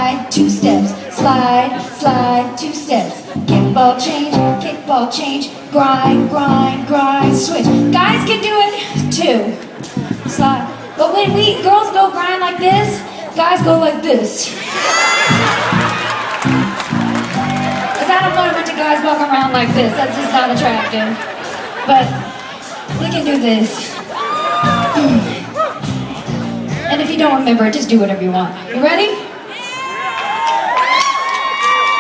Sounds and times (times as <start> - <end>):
Music: 0.0 - 14.5, 15.2 - 27.4
Speech: 10.2 - 14.6, 18.0 - 21.2, 22.9 - 23.9, 26.7 - 29.3.